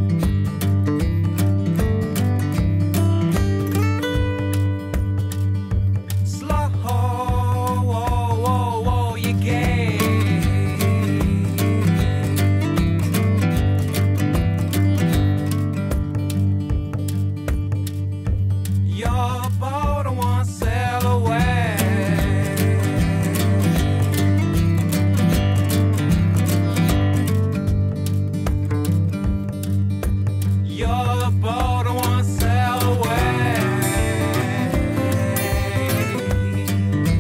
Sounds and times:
Music: 0:00.0 - 0:37.2.

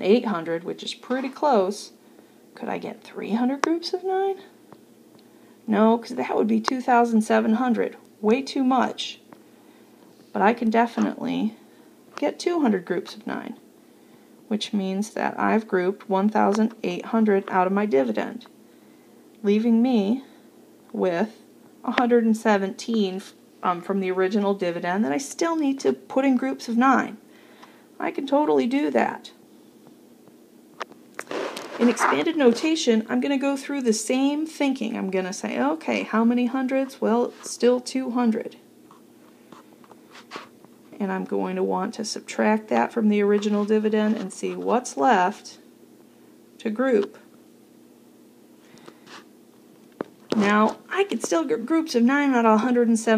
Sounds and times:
Speech: 0:00.0 - 0:02.0, 0:02.6 - 0:04.5, 0:05.7 - 0:09.2, 0:10.3 - 0:11.6, 0:12.2 - 0:13.6, 0:14.5 - 0:18.5, 0:19.4 - 0:20.3, 0:20.9 - 0:27.2, 0:28.0 - 0:29.4, 0:31.8 - 0:38.6, 0:40.9 - 0:45.7, 0:46.6 - 0:47.3, 0:50.3 - 0:53.1
Inside, small room: 0:00.0 - 0:53.1.

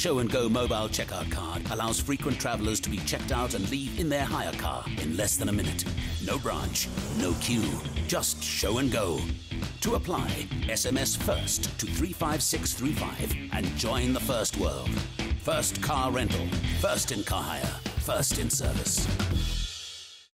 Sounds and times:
Speech: 0:00.0 - 0:19.1
Music: 0:00.0 - 0:20.3.

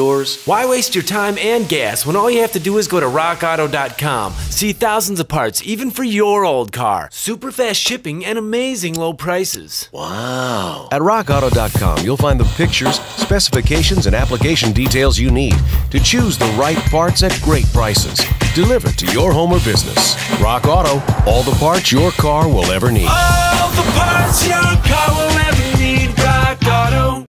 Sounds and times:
Speech: 0:00.0 - 0:23.4
Music: 0:11.3 - 0:27.2.

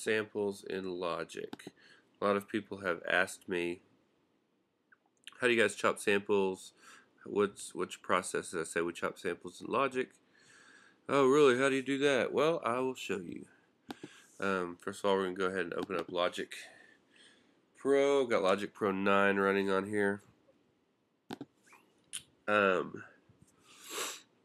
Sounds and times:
Speech: 0:00.0 - 0:03.8, 0:05.3 - 0:10.1, 0:11.1 - 0:13.5, 0:14.4 - 0:16.8, 0:17.8 - 0:20.2, 0:22.5 - 0:23.1.

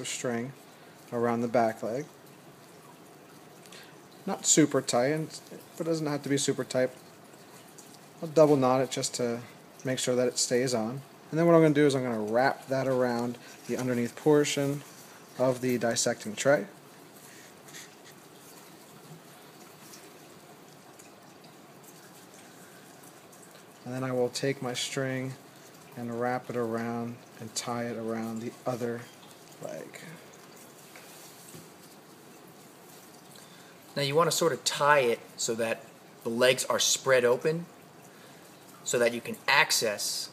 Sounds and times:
Speech: 0:00.0 - 0:02.1, 0:04.3 - 0:07.0, 0:08.2 - 0:16.8, 0:23.8 - 0:25.4, 0:26.0 - 0:30.2, 0:34.0 - 0:37.7, 0:38.8 - 0:40.3.

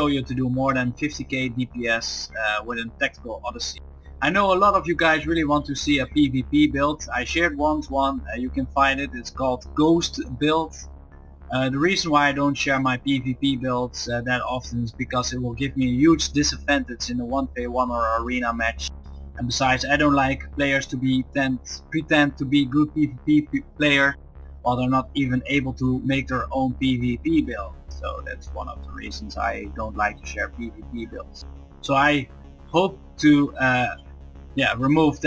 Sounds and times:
Speech: 0:00.0 - 0:10.8, 0:11.5 - 0:34.0, 0:34.6 - 0:35.2.

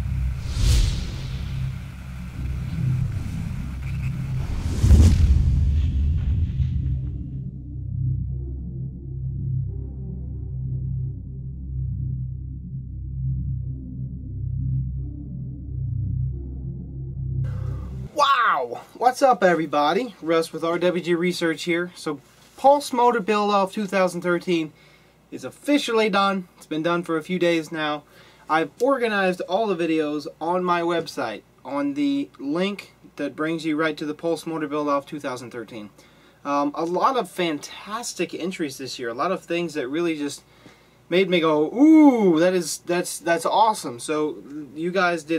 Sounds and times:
Speech: 0:18.2 - 0:24.7, 0:25.3 - 0:40.4, 0:41.1 - 0:45.3.

